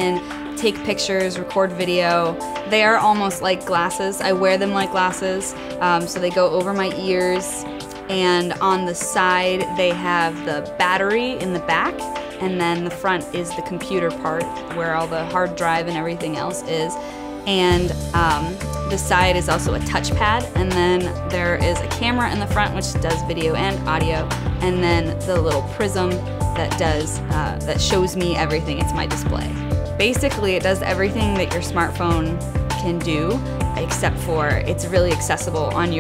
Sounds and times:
Music: 0:00.0 - 0:36.0
Speech: 0:00.0 - 0:36.0.

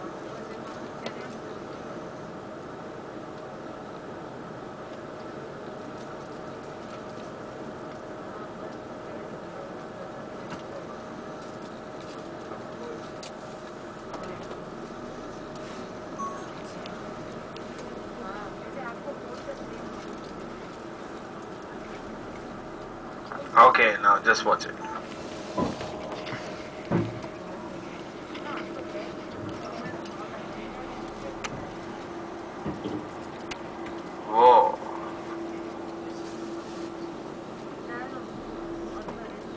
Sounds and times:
Bus: 0:00.0 - 0:39.5
Speech: 0:23.3 - 0:24.8.

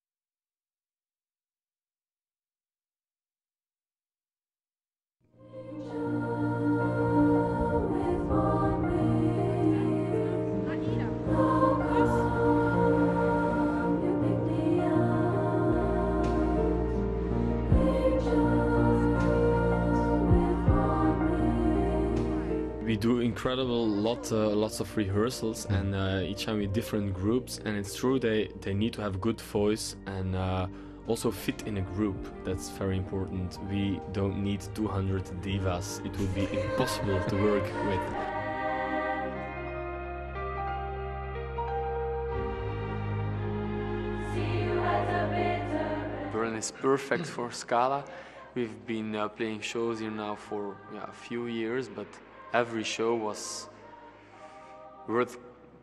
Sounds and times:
Choir: 0:05.3 - 0:40.1, 0:42.3 - 0:55.8
Speech: 0:22.8 - 0:38.2, 0:46.4 - 0:53.7, 0:55.1 - 0:55.4.

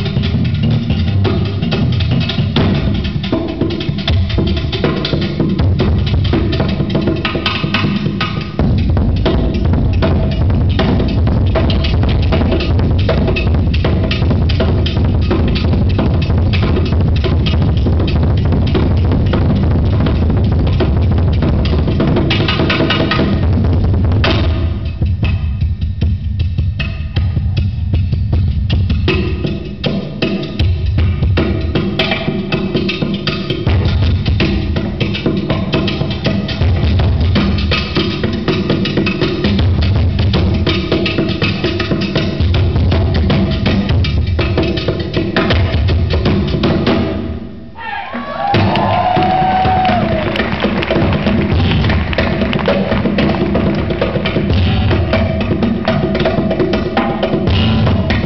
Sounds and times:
Percussion: 0:00.0 - 0:58.2.

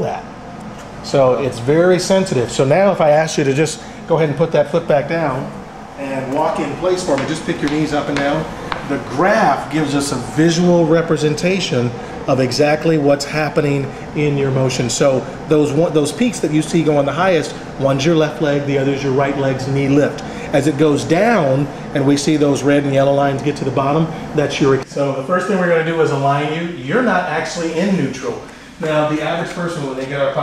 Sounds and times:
Speech: 0:00.0 - 0:00.3, 0:01.0 - 0:30.4.

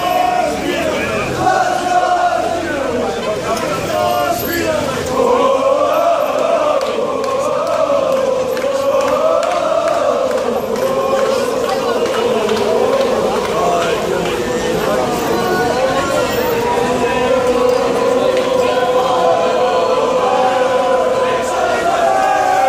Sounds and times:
Speech: 0:00.0 - 0:22.6.

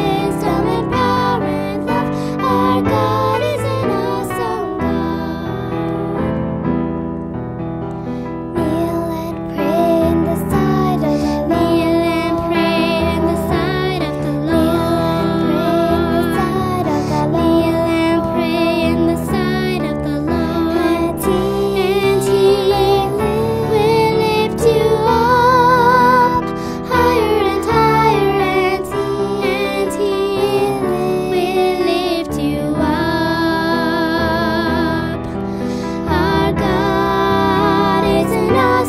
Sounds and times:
Electric piano: 0:00.0 - 0:38.8.

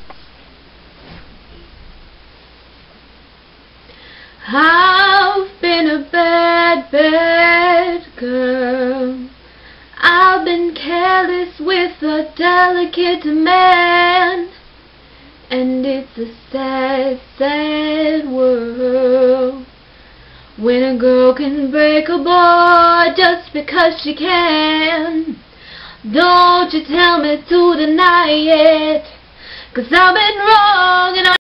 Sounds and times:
Female singing: 0:04.4 - 0:09.4, 0:10.0 - 0:14.6, 0:15.5 - 0:19.7, 0:20.6 - 0:25.4, 0:26.1 - 0:29.2, 0:29.8 - 0:31.4.

